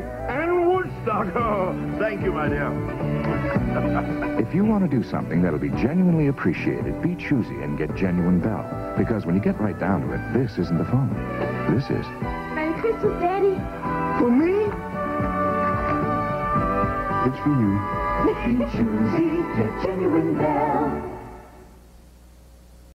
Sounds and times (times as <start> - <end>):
Music: 0.0 - 21.8.